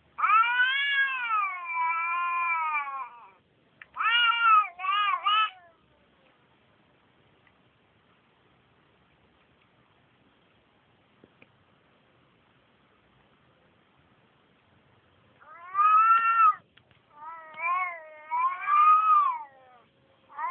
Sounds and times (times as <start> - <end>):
Domestic animals, pets: 15.4 - 16.6, 17.2 - 20.5.